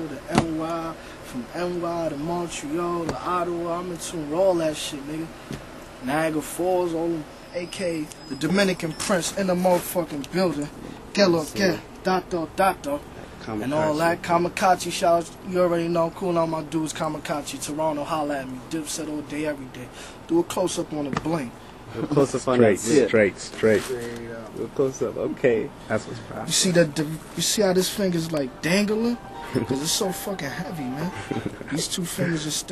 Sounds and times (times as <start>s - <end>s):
Speech: 0.0s - 5.3s, 6.0s - 32.7s.